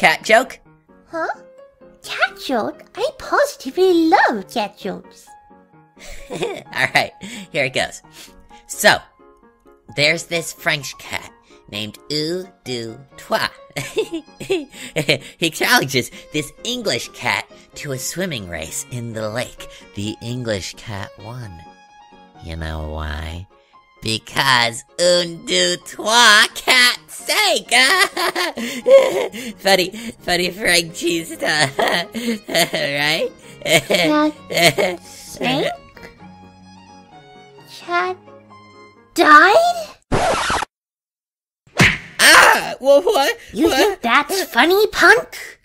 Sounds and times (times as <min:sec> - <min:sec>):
Music: 0:00.0 - 0:40.0, 0:42.2 - 0:45.6.